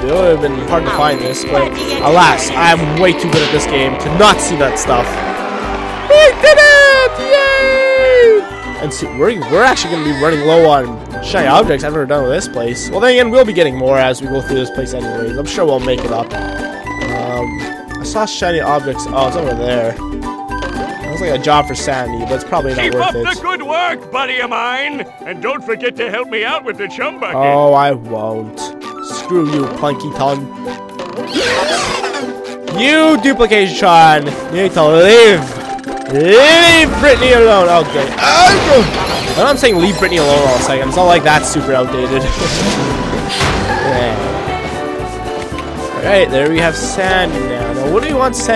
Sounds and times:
Music: 0:00.0 - 0:48.5
Speech: 0:21.2 - 0:30.5, 0:46.0 - 0:48.5.

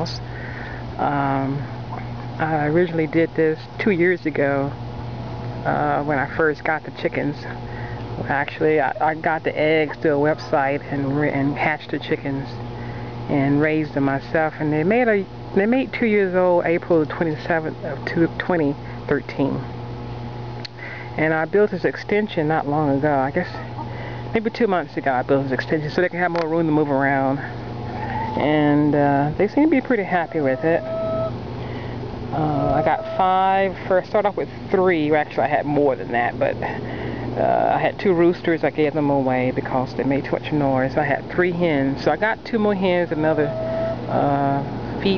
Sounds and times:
Speech: 0:01.0 - 0:01.7, 0:02.4 - 0:04.8, 0:05.6 - 0:07.6, 0:08.2 - 0:12.6, 0:13.3 - 0:19.7, 0:21.2 - 0:23.7, 0:24.4 - 0:27.6, 0:28.4 - 0:30.8, 0:32.4 - 0:36.8, 0:37.4 - 0:43.5, 0:44.1 - 0:45.1.

